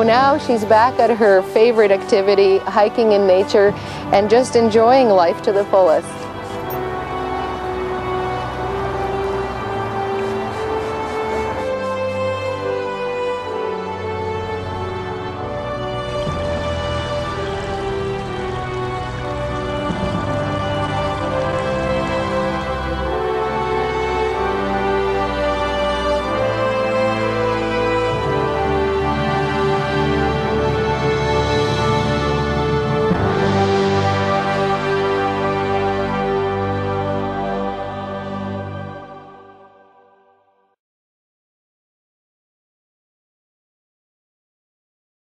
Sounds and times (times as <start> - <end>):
Theme music: 0.0 - 40.2.